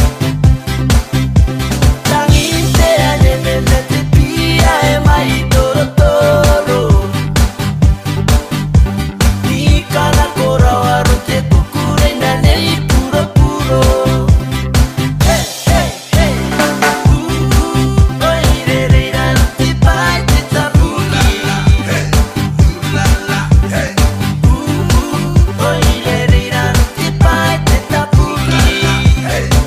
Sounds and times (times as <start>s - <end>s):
Electronic music: 0.0s - 29.6s.